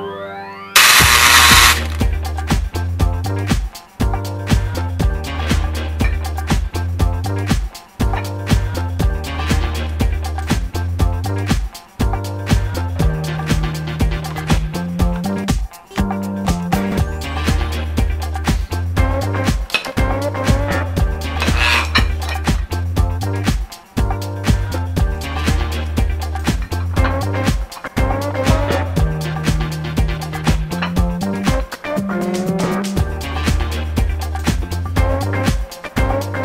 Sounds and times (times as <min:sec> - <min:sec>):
Music: 0:00.0 - 0:36.4.